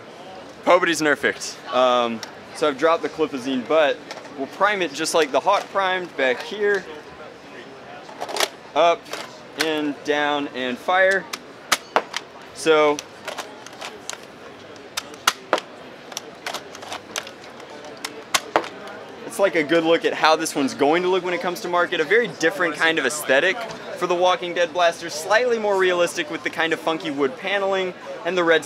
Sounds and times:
Speech: 0:00.3 - 0:08.2, 0:08.8 - 0:11.3, 0:12.5 - 0:13.1, 0:17.5 - 0:28.6.

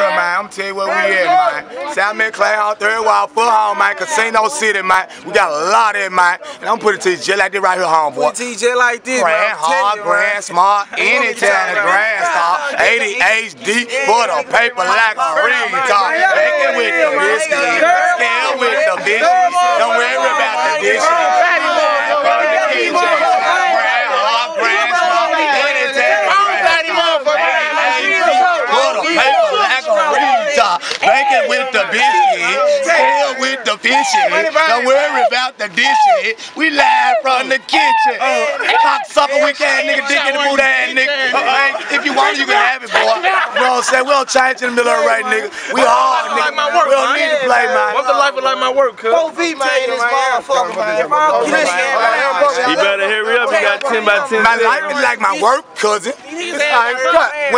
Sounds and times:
Speech: 0:00.0 - 0:57.5.

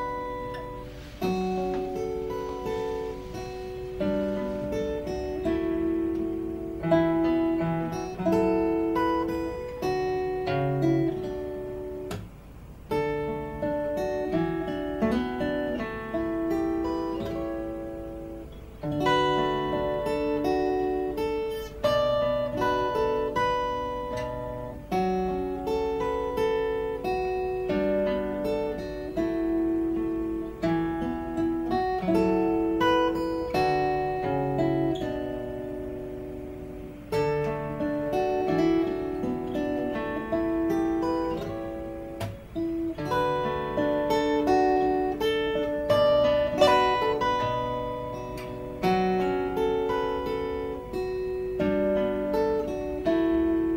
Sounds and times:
Strum: 0:00.0 - 0:53.7.

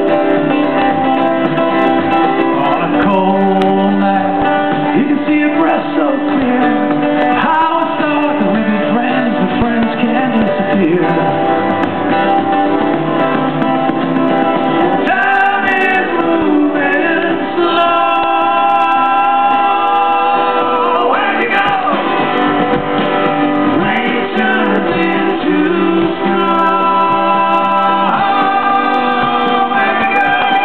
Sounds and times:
Rhythm and blues: 0:00.0 - 0:30.6.

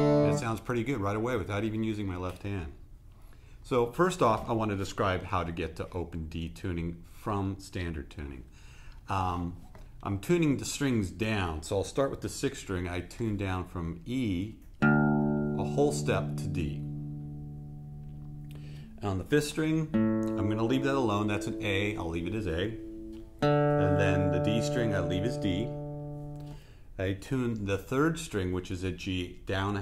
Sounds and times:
Acoustic guitar: 0:00.0 - 0:00.5, 0:14.7 - 0:26.8
Speech: 0:00.2 - 0:02.8, 0:03.6 - 0:08.5, 0:09.1 - 0:14.6, 0:15.6 - 0:16.9, 0:19.0 - 0:22.8, 0:23.8 - 0:25.8, 0:27.0 - 0:29.8.

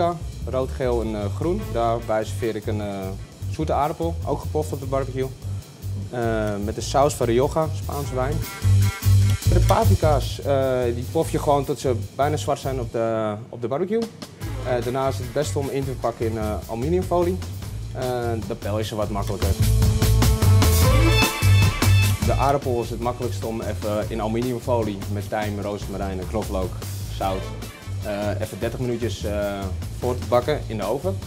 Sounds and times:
Speech: 0:00.0 - 0:05.4, 0:06.0 - 0:08.4, 0:09.5 - 0:17.4, 0:18.0 - 0:19.6, 0:22.2 - 0:31.2
Music: 0:00.0 - 0:31.2.

